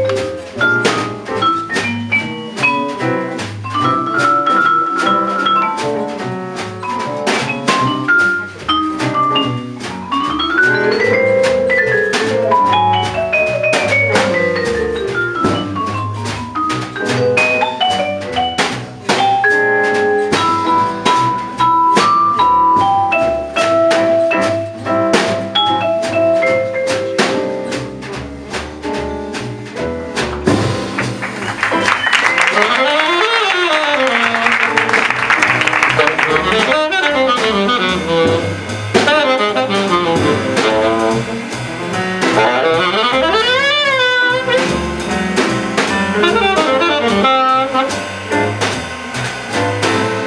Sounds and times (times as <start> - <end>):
Drum: 0.0 - 50.2.